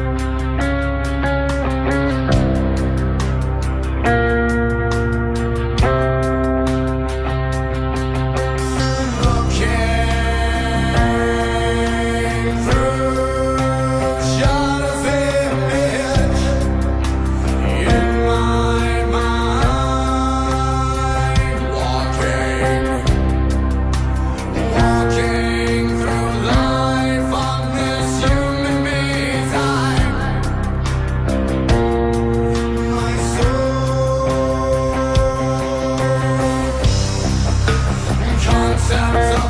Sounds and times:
Blues: 0:00.0 - 0:39.4
Soul music: 0:00.0 - 0:39.4.

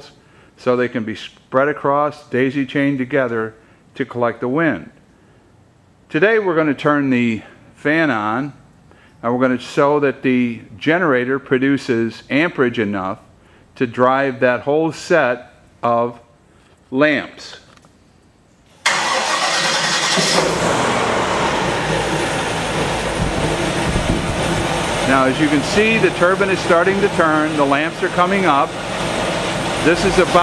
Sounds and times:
Speech: 0:00.0 - 0:05.0, 0:06.1 - 0:08.6, 0:09.2 - 0:16.3, 0:16.9 - 0:17.7, 0:25.1 - 0:28.7, 0:29.8 - 0:30.4.

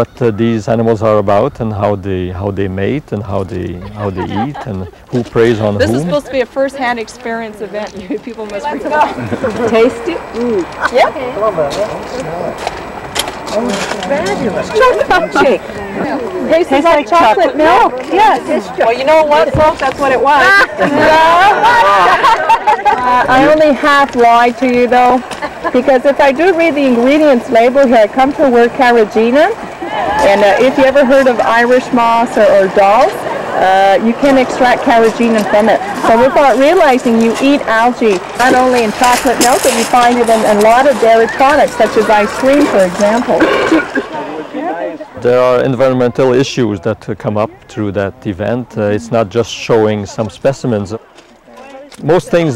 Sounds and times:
Chatter: 0:00.0 - 0:52.5
Outside, rural or natural: 0:00.0 - 0:52.5.

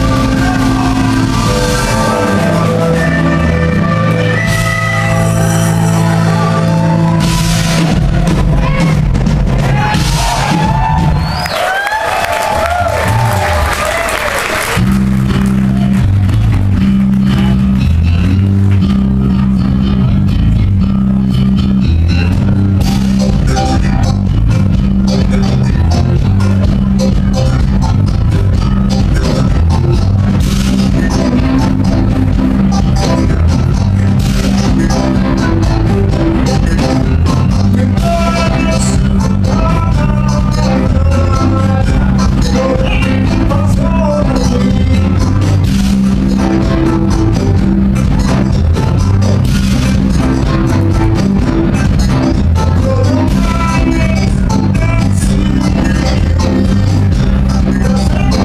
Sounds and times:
Rhythm and blues: 0:00.0 - 0:58.4.

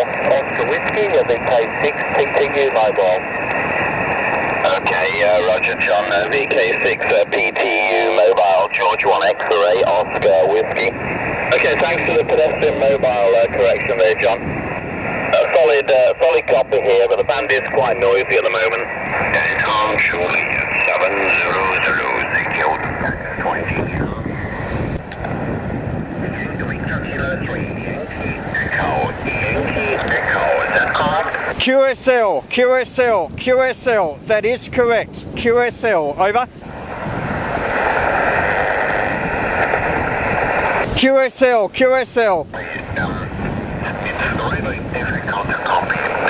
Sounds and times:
Speech: 0:00.0 - 0:03.2, 0:04.6 - 0:14.4, 0:15.3 - 0:24.3, 0:26.3 - 0:36.5, 0:40.9 - 0:46.3
Outside, rural or natural: 0:00.0 - 0:46.3.

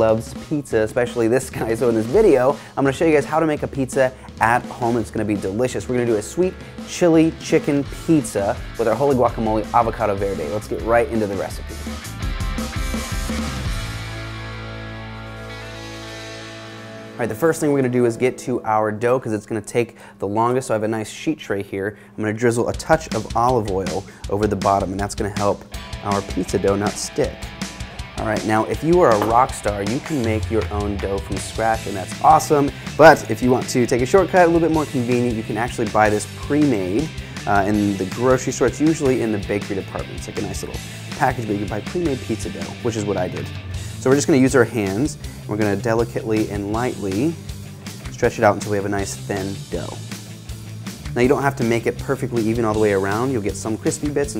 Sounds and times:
Speech: 0:00.0 - 0:11.7, 0:17.2 - 0:27.4, 0:28.2 - 0:47.4, 0:48.1 - 0:50.0, 0:51.1 - 0:54.3
Music: 0:00.0 - 0:54.3.

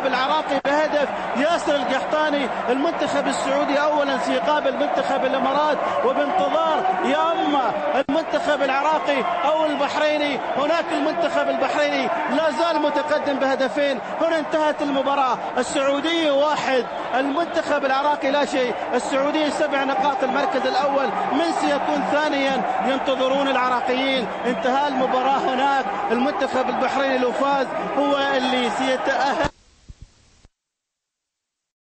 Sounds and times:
Speech: 0:00.0 - 0:29.5.

